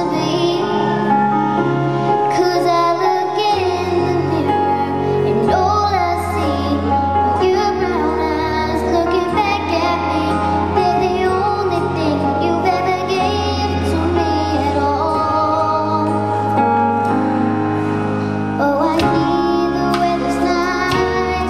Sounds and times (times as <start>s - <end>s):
Child singing: 0.0s - 1.2s, 2.3s - 16.2s, 18.6s - 21.5s
Music: 0.0s - 21.5s.